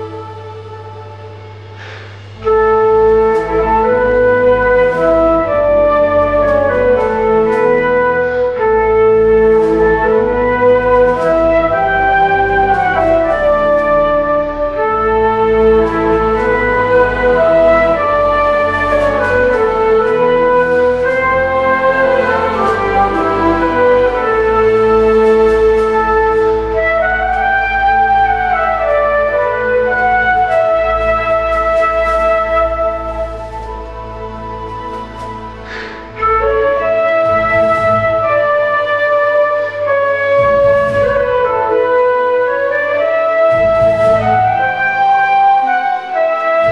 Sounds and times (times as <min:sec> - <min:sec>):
Flute: 0:00.0 - 0:46.7.